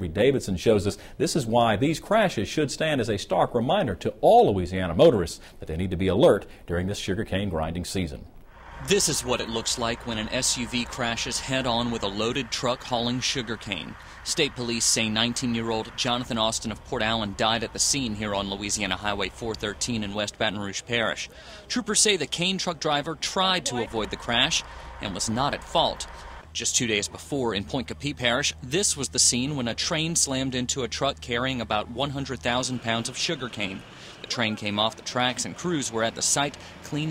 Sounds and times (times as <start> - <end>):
Speech: 0.0 - 37.1
Truck: 8.5 - 37.1.